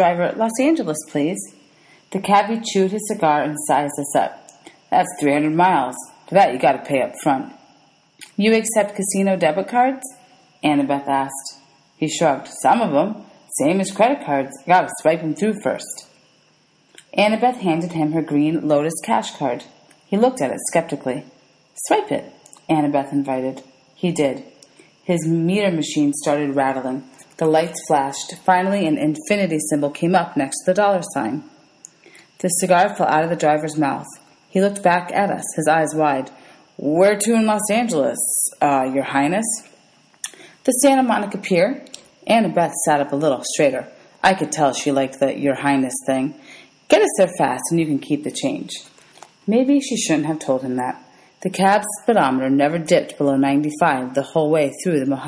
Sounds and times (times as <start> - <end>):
Speech: 0.0 - 7.6, 8.2 - 16.1, 17.0 - 31.5, 32.4 - 39.7, 40.7 - 48.9, 49.5 - 55.2.